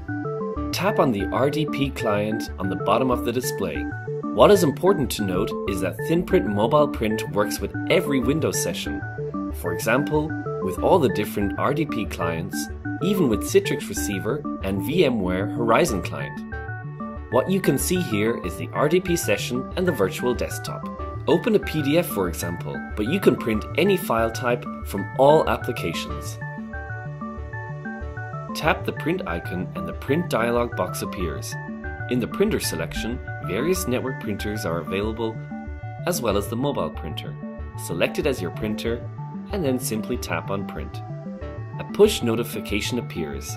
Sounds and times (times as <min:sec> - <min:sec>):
Music: 0:00.0 - 0:43.5
Speech: 0:00.7 - 0:09.0, 0:09.6 - 0:16.4, 0:17.3 - 0:26.4, 0:28.6 - 0:35.4, 0:36.0 - 0:41.0, 0:41.8 - 0:43.5.